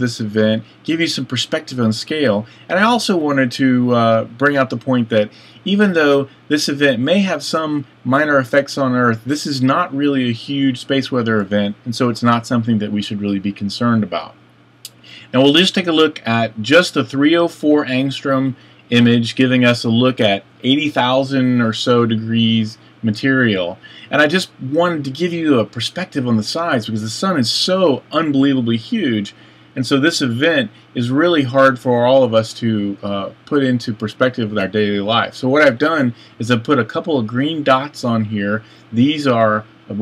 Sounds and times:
Speech: 0:00.0 - 0:40.0.

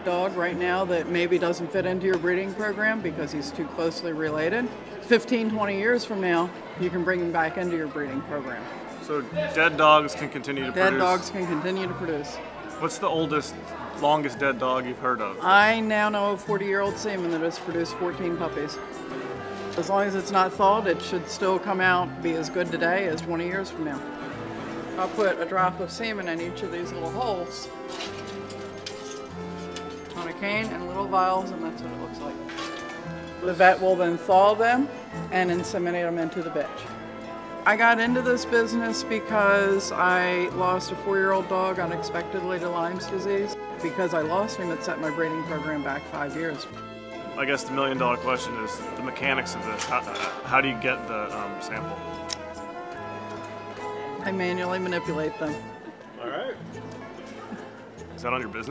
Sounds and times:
Music: 0:00.0 - 0:58.7.

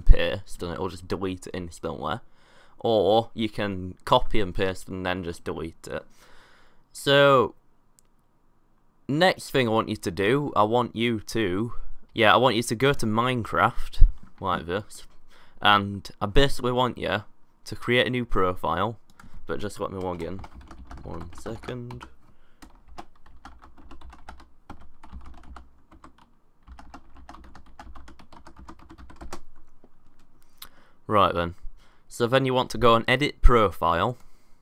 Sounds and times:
Speech: 0:00.0 - 0:02.2, 0:02.8 - 0:06.1, 0:06.9 - 0:07.6, 0:09.1 - 0:22.1, 0:31.1 - 0:34.2
Computer keyboard: 0:19.1 - 0:30.3.

